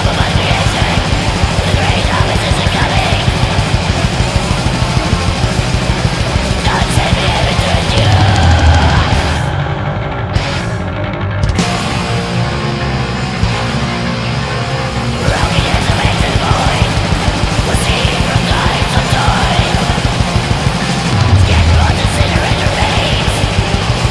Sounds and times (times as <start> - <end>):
Angry music: 0.0 - 24.1
Rock music: 0.0 - 24.1.